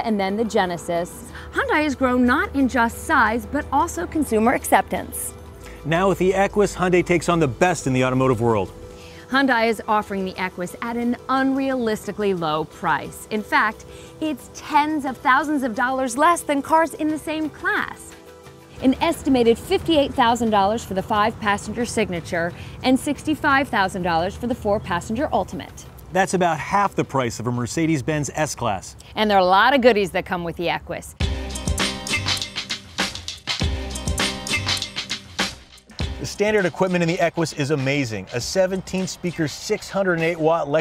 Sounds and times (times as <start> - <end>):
Music: 0.0 - 28.5, 31.1 - 40.8.